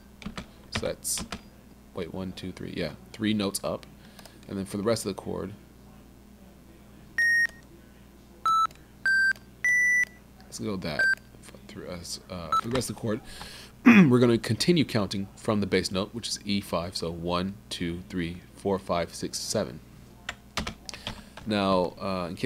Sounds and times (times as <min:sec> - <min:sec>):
Speech: 0:00.7 - 0:09.1, 0:10.3 - 0:20.4, 0:21.4 - 0:22.4.